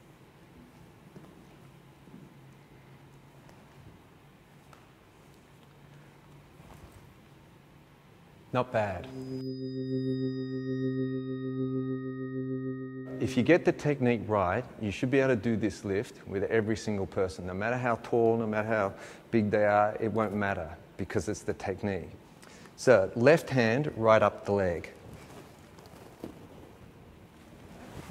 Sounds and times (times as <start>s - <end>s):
Speech: 8.5s - 9.1s, 13.2s - 22.2s, 22.8s - 25.0s.